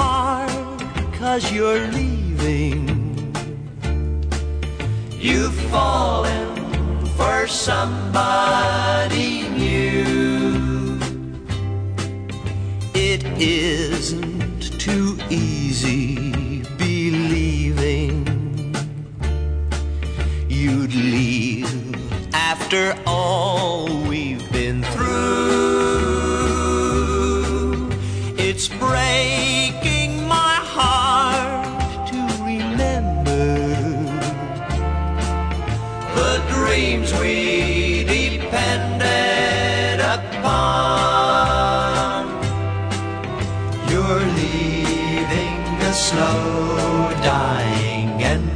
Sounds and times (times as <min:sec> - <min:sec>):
Country: 0:00.0 - 0:48.5.